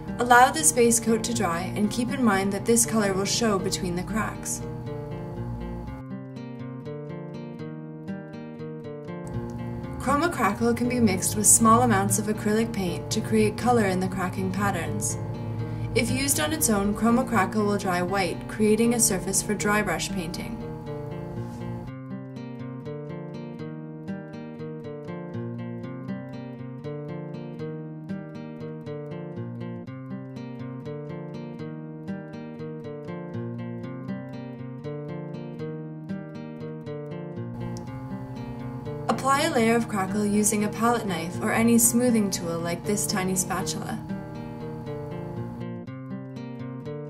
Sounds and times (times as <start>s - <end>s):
Music: 0.0s - 47.0s
Speech: 0.2s - 4.6s, 10.0s - 15.2s, 16.0s - 20.6s, 39.1s - 44.0s.